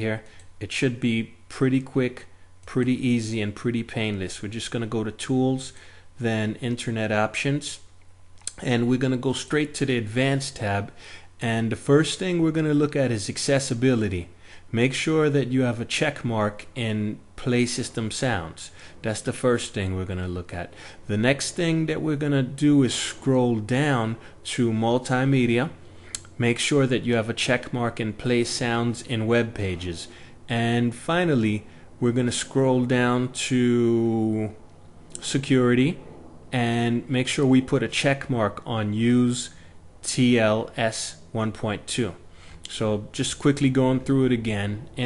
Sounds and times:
Speech: 0.0 - 7.9, 8.5 - 45.0.

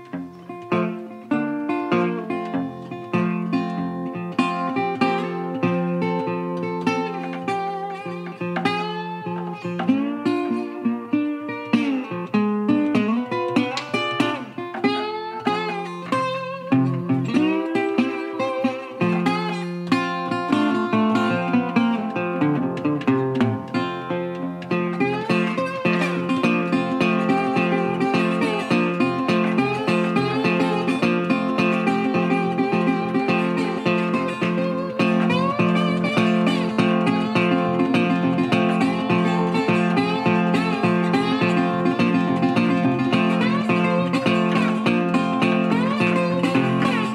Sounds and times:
Music: 0.0 - 47.1.

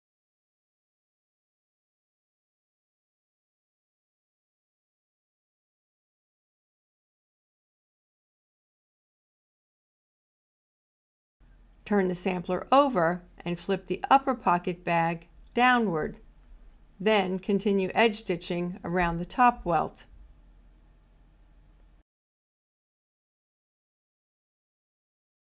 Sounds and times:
Speech: 11.9 - 16.2, 17.0 - 20.0.

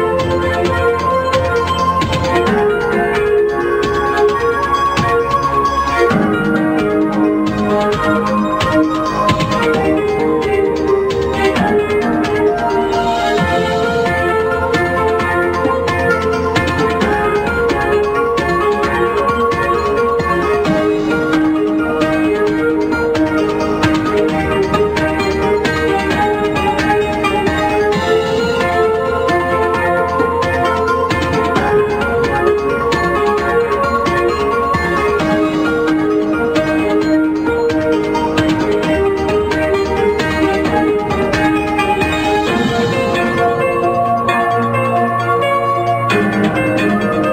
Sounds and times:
Music: 0.0 - 47.3.

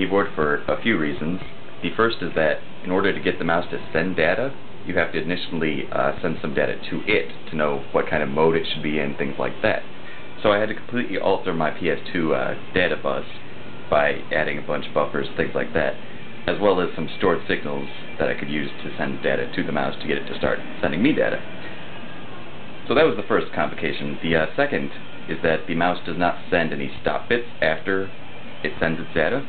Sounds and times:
Speech: 0.0 - 21.4, 22.9 - 29.4.

